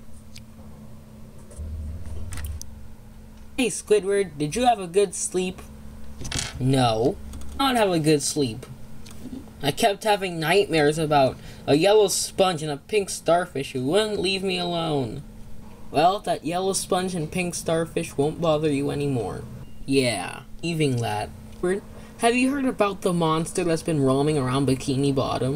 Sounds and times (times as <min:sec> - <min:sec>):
Speech: 0:03.6 - 0:05.7, 0:06.6 - 0:08.7, 0:09.6 - 0:15.2, 0:16.0 - 0:25.5.